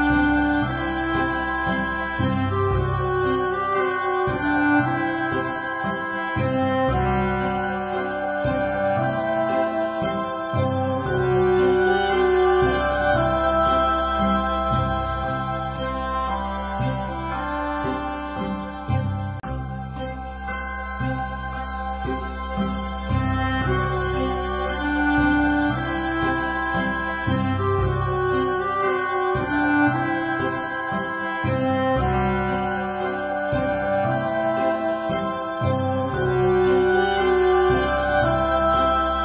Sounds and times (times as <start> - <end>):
Soul music: 0.0 - 39.2
Theme music: 0.0 - 39.2.